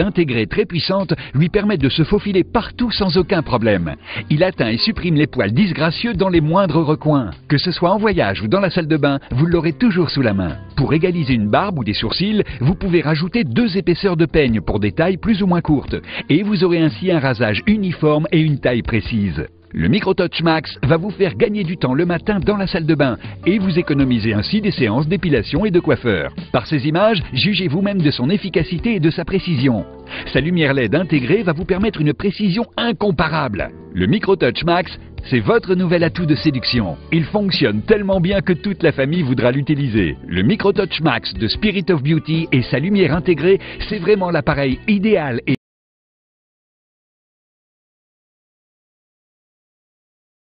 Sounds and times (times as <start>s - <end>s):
Music: 0.0s - 45.6s
Speech: 0.0s - 45.6s.